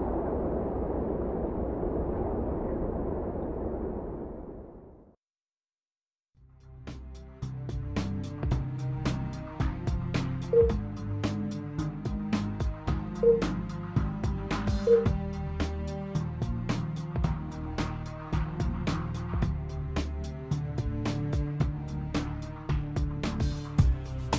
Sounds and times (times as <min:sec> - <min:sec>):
Music: 0:06.4 - 0:24.3.